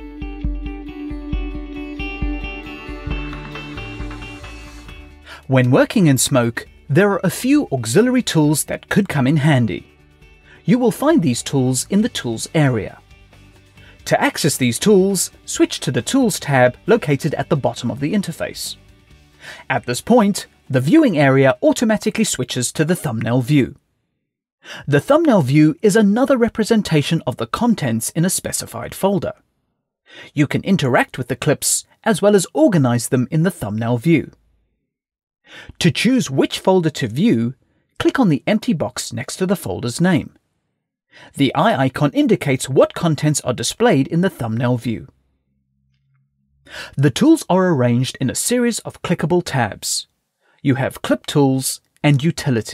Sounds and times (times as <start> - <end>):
Speech: 5.3 - 9.9, 10.6 - 13.0, 14.0 - 18.8, 19.5 - 23.8, 24.7 - 29.4, 30.2 - 34.4, 35.7 - 40.4, 41.3 - 45.1, 46.9 - 52.7.